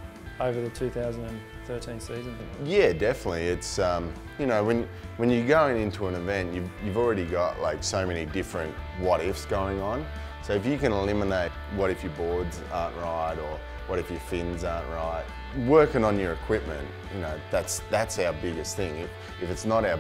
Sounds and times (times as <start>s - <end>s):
Music: 0.0s - 20.0s
Speech: 0.4s - 20.0s.